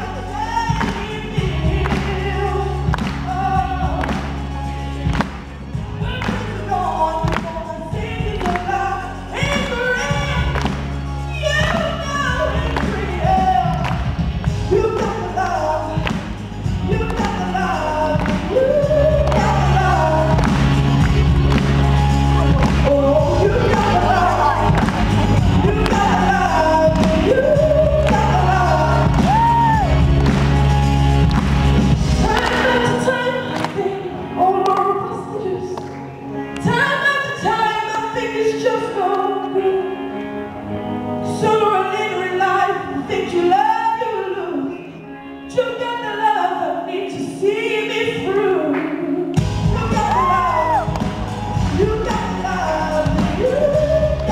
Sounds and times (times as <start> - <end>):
Male singing: 0.0 - 4.2, 6.0 - 10.6, 11.3 - 14.0, 14.7 - 16.2, 16.8 - 20.6, 22.6 - 30.0, 32.2 - 35.8, 45.5 - 50.9, 51.7 - 54.3
Music: 0.0 - 54.3.